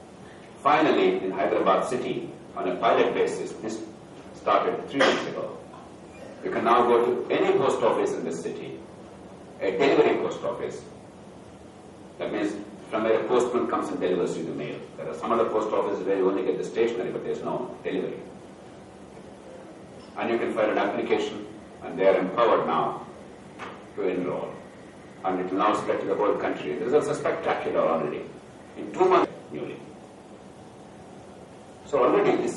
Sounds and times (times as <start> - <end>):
Narration, monologue: 0.0 - 32.5
Male speech, man speaking: 0.6 - 5.6, 6.4 - 8.8, 9.6 - 10.9, 12.2 - 18.3, 20.2 - 23.1, 24.0 - 24.6, 25.2 - 29.9, 31.9 - 32.5.